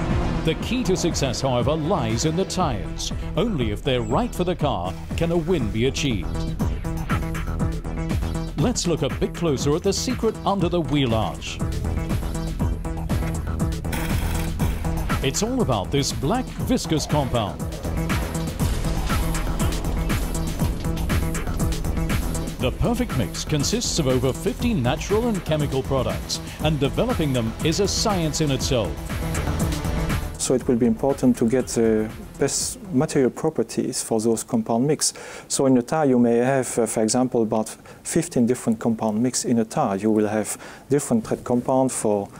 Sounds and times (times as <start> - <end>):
Music: 0.0 - 34.6
Speech: 0.5 - 6.5, 8.6 - 11.6, 15.2 - 17.6, 22.6 - 29.0, 30.4 - 42.3.